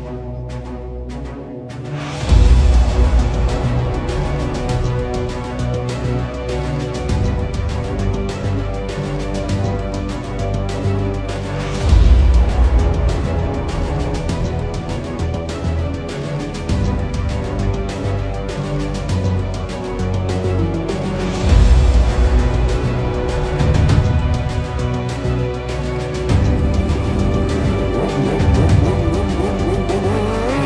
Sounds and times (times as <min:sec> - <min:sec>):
Music: 0:00.0 - 0:30.6.